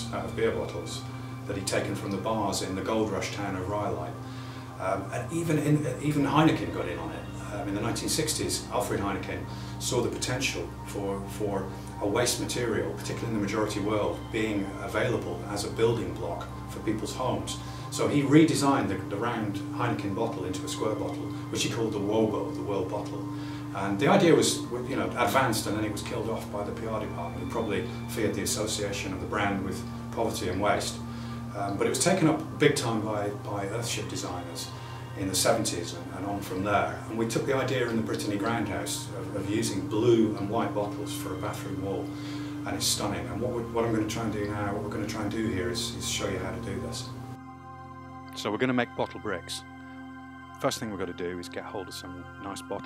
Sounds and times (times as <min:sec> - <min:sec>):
Speech: 0:00.0 - 0:04.2, 0:04.8 - 0:23.2, 0:23.8 - 0:47.1, 0:48.4 - 0:49.6, 0:50.6 - 0:52.8
Music: 0:00.0 - 0:52.8.